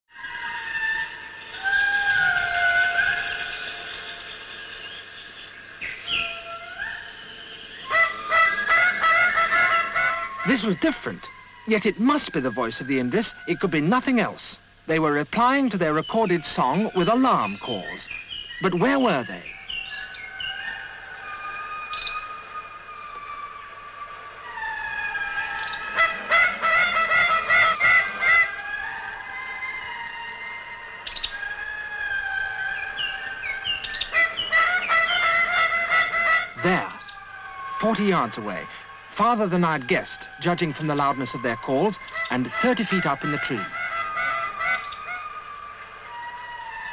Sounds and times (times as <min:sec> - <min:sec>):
Animal: 0:00.1 - 0:04.8, 0:05.8 - 0:14.4
Outside, rural or natural: 0:00.1 - 0:46.9.